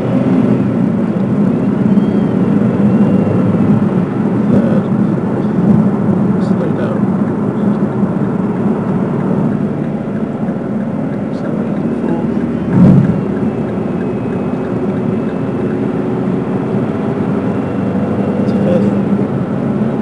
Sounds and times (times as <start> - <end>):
Car: 0.0 - 20.0.